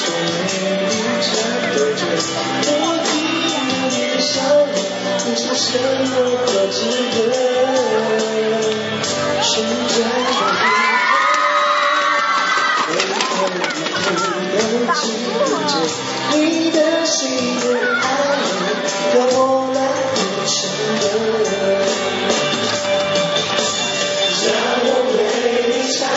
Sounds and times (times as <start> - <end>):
Rapping: 0.0 - 11.9, 12.9 - 21.8
Male singing: 0.0 - 22.4, 24.2 - 26.1
Music: 0.0 - 26.1
Speech: 13.5 - 16.0.